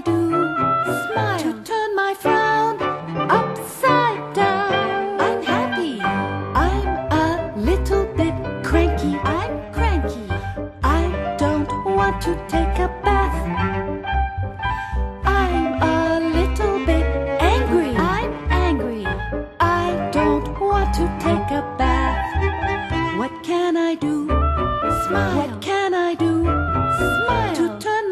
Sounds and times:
Music: 0.0s - 28.1s.

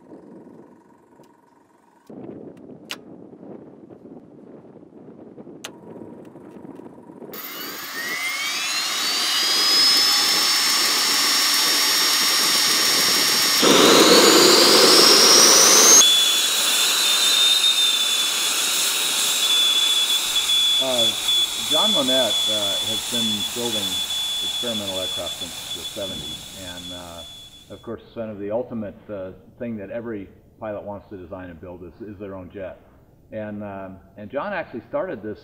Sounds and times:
Jet engine: 5.7s - 27.9s.

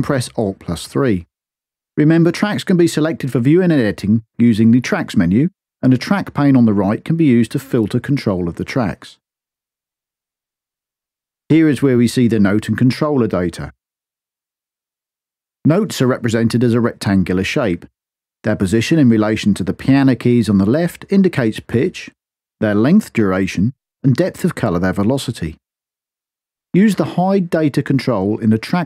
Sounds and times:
Narration, monologue: 0.0s - 28.8s.

